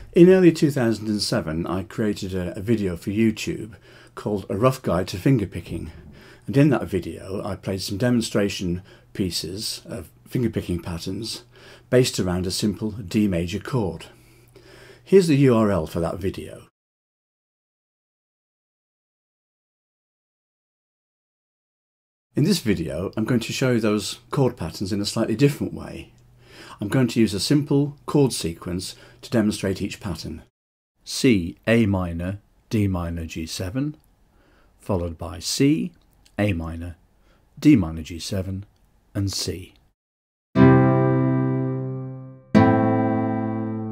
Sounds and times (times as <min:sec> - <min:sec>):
Speech: 0:00.0 - 0:14.2, 0:15.1 - 0:16.7, 0:22.4 - 0:34.1, 0:34.8 - 0:37.0, 0:37.6 - 0:39.8.